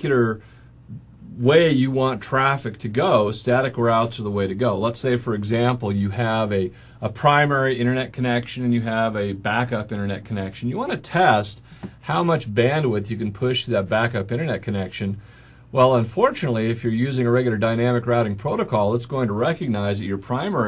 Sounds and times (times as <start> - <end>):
Speech: 0.0 - 20.6.